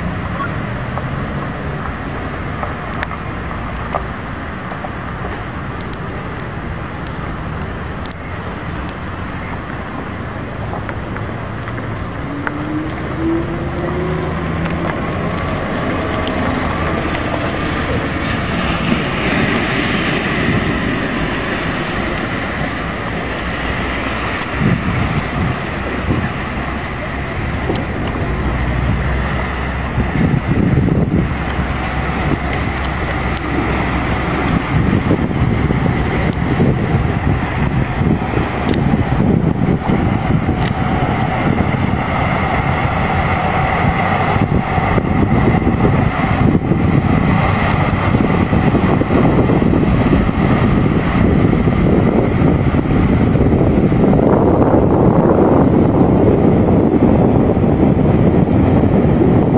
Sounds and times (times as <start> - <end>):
Bus: 0.0 - 59.5
Stream: 0.0 - 59.5.